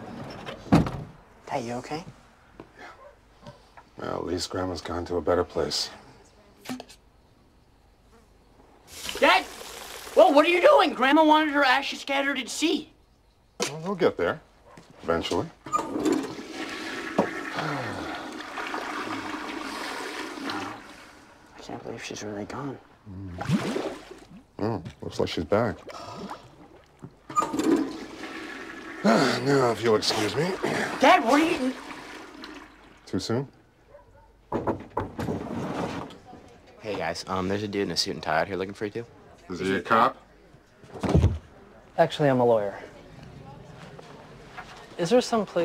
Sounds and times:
Toilet flush: 8.9 - 10.4, 15.7 - 21.4, 27.3 - 33.3.

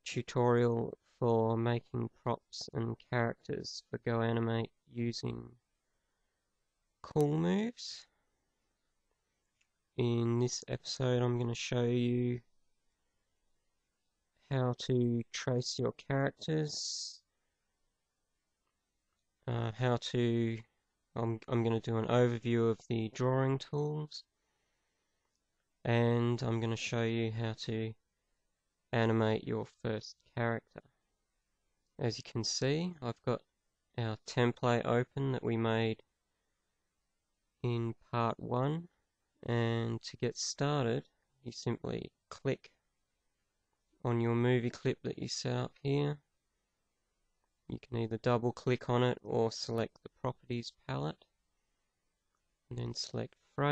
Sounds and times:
Speech: 0.0 - 5.6, 7.0 - 8.1, 10.0 - 12.5, 14.5 - 17.3, 19.5 - 24.3, 25.9 - 28.0, 28.9 - 30.9, 32.0 - 36.1, 37.6 - 42.8, 44.0 - 46.3, 47.7 - 51.2, 52.7 - 53.7.

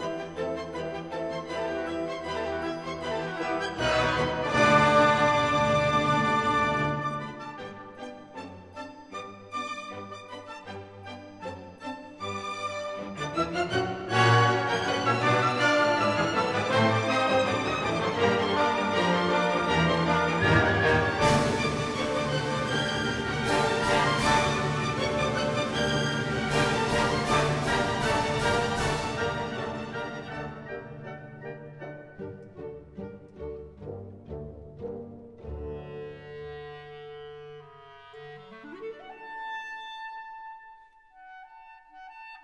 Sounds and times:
Music: 0.0 - 42.4.

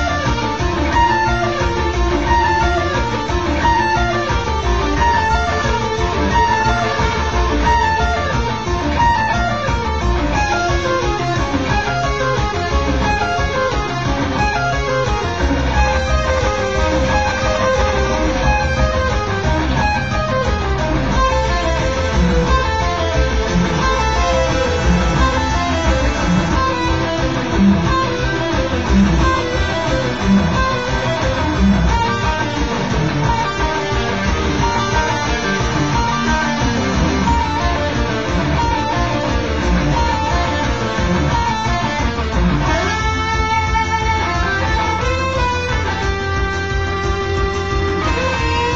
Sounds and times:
Guitar: 0.0 - 48.7.

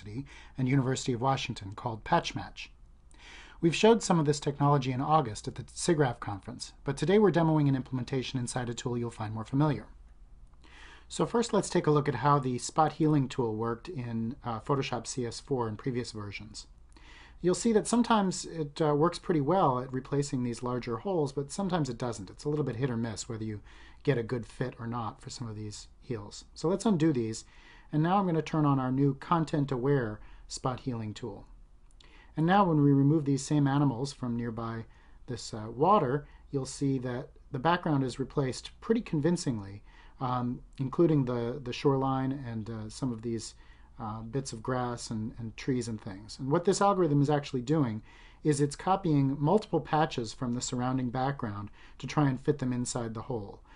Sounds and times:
Speech: 0.0 - 2.8, 3.6 - 10.0, 11.1 - 16.7, 17.4 - 31.6, 32.4 - 53.7.

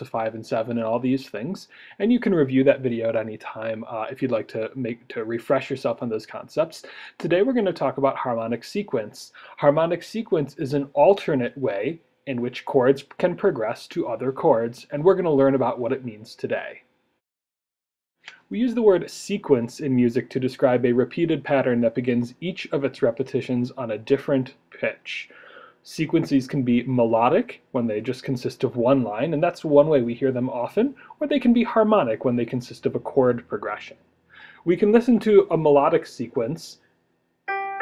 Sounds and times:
Speech: 0.0 - 16.8, 18.3 - 36.8.

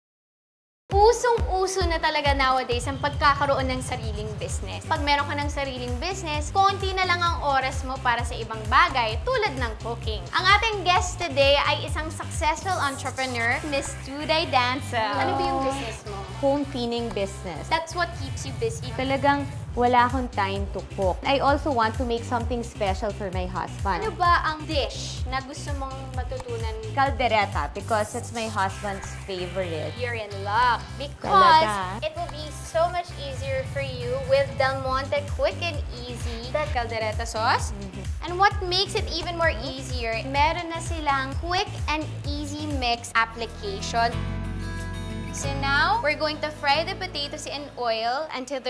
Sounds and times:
Speech: 0.9 - 33.4
Music: 0.9 - 48.7.

